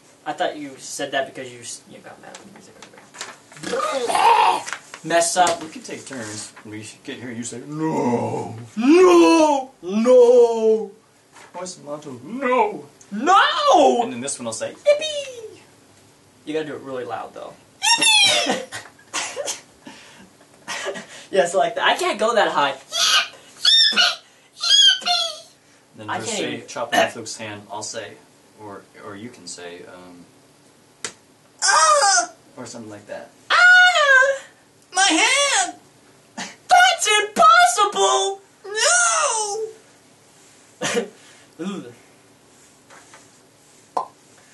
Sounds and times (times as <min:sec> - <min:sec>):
Inside, small room: 0:00.0 - 0:44.5.